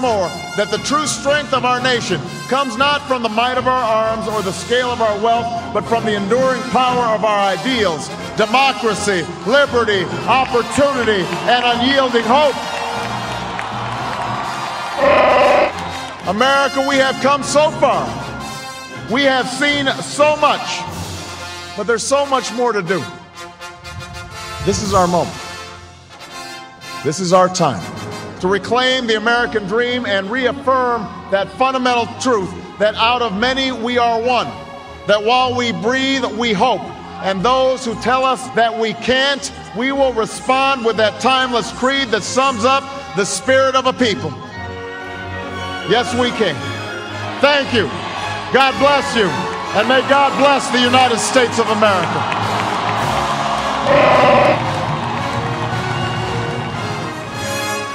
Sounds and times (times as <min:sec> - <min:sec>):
Male speech, man speaking: 0:00.0 - 0:12.6, 0:16.3 - 0:18.2, 0:19.1 - 0:20.9, 0:21.8 - 0:23.2, 0:24.6 - 0:25.4, 0:27.0 - 0:44.4, 0:45.8 - 0:46.7, 0:47.4 - 0:52.2
Music: 0:00.0 - 0:57.9.